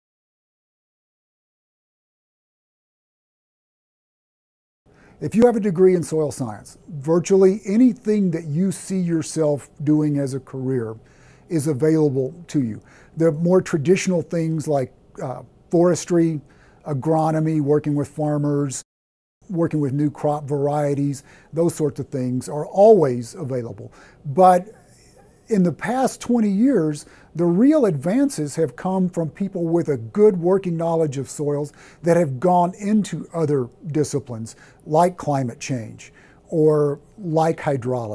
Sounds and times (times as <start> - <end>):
Speech: 5.2 - 38.1.